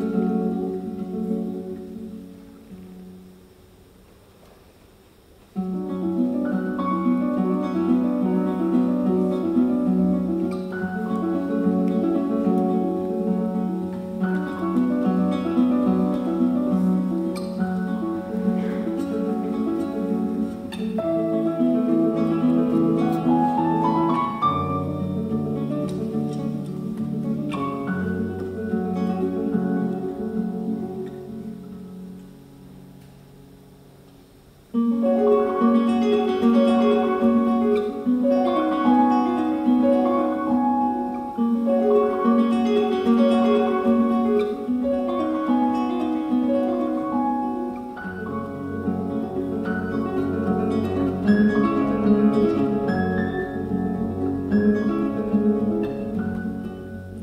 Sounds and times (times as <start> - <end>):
Music: 0.0 - 4.5, 5.4 - 57.2.